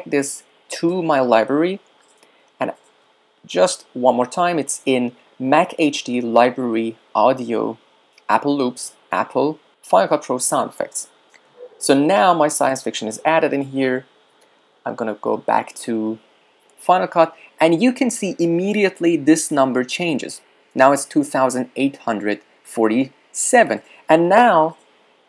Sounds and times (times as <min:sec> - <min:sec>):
Speech: 0:00.0 - 0:01.8, 0:03.5 - 0:11.2, 0:11.8 - 0:14.1, 0:14.8 - 0:16.2, 0:16.8 - 0:24.8.